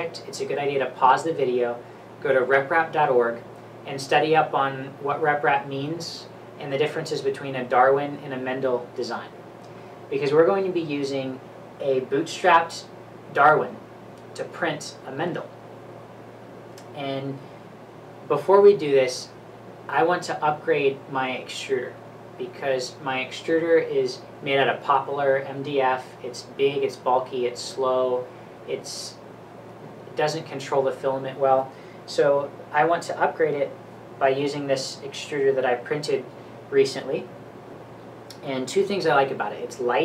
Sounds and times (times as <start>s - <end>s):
Speech: 0.0s - 9.4s, 10.1s - 13.8s, 14.4s - 15.6s, 16.8s - 17.5s, 18.3s - 29.2s, 30.1s - 37.3s, 38.3s - 40.0s.